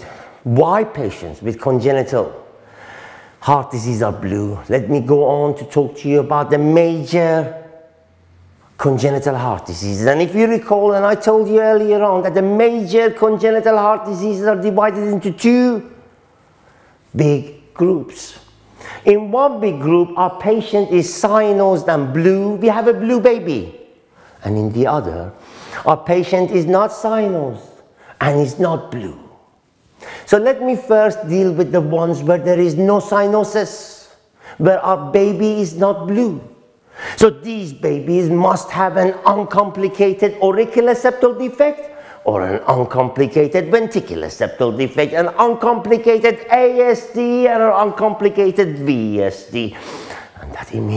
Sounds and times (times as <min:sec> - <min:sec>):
Speech: 0:00.0 - 0:02.5, 0:03.4 - 0:07.7, 0:08.8 - 0:16.0, 0:17.1 - 0:23.8, 0:24.4 - 0:29.4, 0:30.2 - 0:36.6, 0:37.2 - 0:50.9.